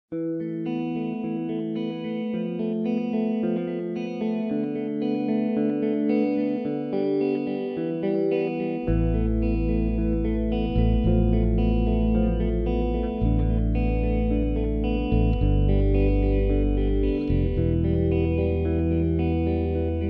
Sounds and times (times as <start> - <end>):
Effects unit: 0.1 - 20.0
Music: 0.1 - 20.0.